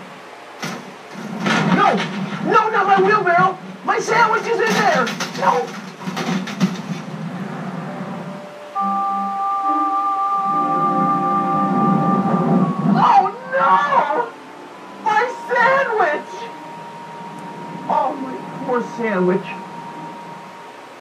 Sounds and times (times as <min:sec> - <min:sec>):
Speech: 0:01.7 - 0:05.7, 0:15.1 - 0:16.6, 0:17.9 - 0:19.6
Music: 0:07.9 - 0:21.0.